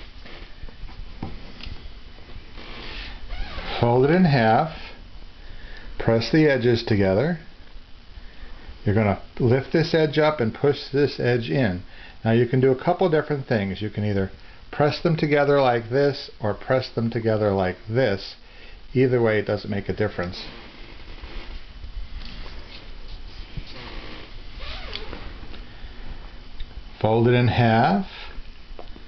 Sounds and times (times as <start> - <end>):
Inside, small room: 0.0 - 29.0
Speech: 3.7 - 5.0, 6.0 - 7.5, 8.8 - 20.6, 27.0 - 28.3.